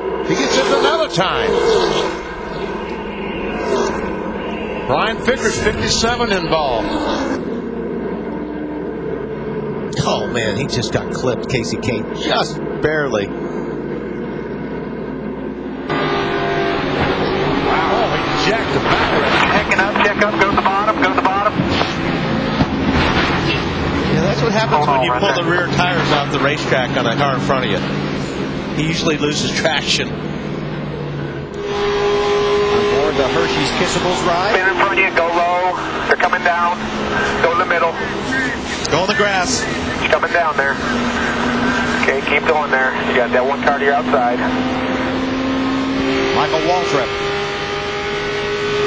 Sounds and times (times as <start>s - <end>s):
Car: 0.0s - 48.8s
Speech: 4.9s - 6.9s, 10.0s - 13.3s, 17.7s - 21.6s, 24.1s - 27.8s, 28.8s - 30.1s, 32.8s - 41.0s, 42.0s - 44.6s, 46.3s - 47.1s.